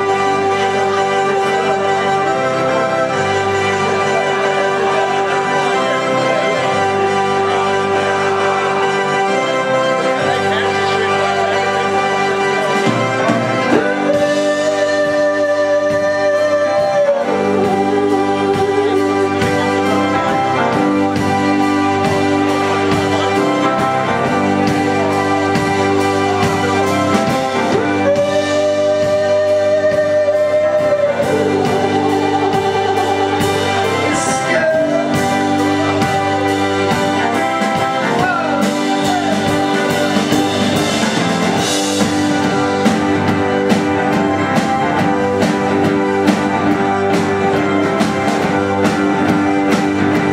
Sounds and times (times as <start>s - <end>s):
Blues: 0.0s - 50.3s
Speech: 9.8s - 20.1s, 33.8s - 36.5s, 37.8s - 40.1s.